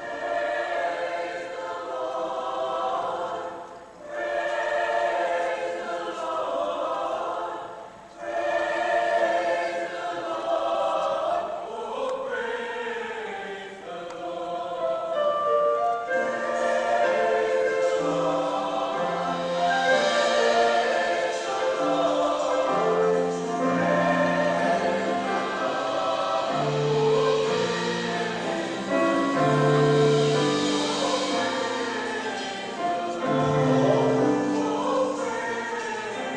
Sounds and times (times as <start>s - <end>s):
Choir: 0.0s - 36.3s.